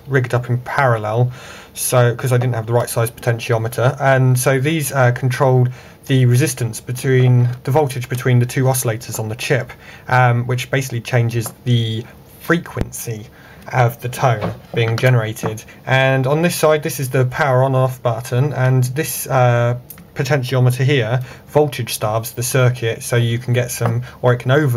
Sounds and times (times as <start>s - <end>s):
Speech: 0.0s - 24.7s.